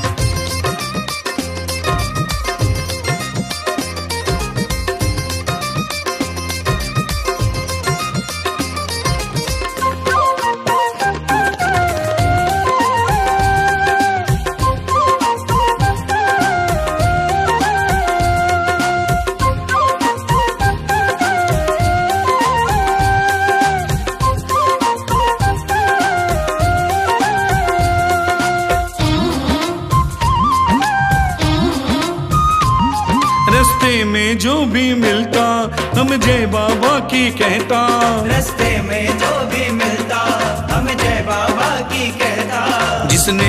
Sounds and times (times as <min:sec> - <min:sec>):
Music of Bollywood: 0:00.0 - 0:43.4.